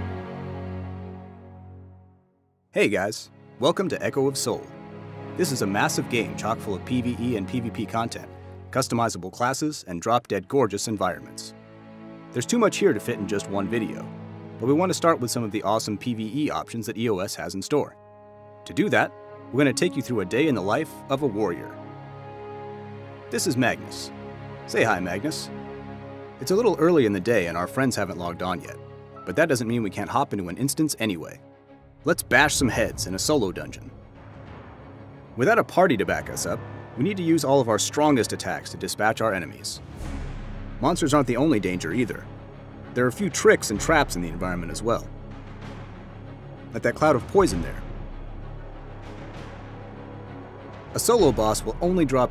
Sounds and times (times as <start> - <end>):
Music: 0.0 - 52.3
Speech: 2.8 - 4.7, 5.4 - 11.5, 12.4 - 18.0, 18.7 - 21.8, 23.3 - 24.1, 24.7 - 25.5, 26.4 - 31.4, 32.1 - 33.9, 35.4 - 39.8, 40.8 - 42.3, 43.0 - 45.1, 46.8 - 47.9, 51.0 - 52.3.